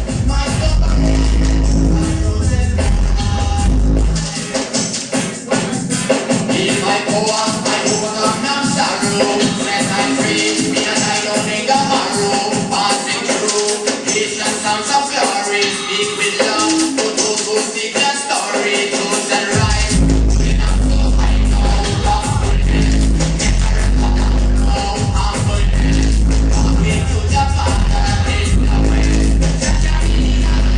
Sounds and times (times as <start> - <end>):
Music: 0.0 - 30.7.